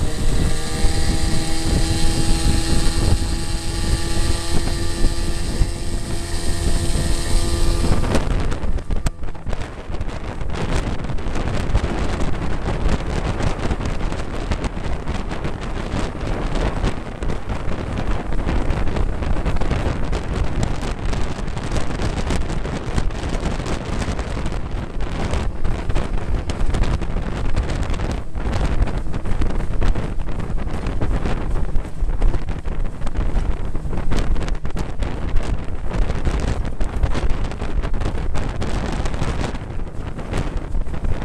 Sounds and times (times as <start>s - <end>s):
Motorboat, speedboat: 0.0s - 41.2s
Wind noise (microphone): 0.0s - 41.2s.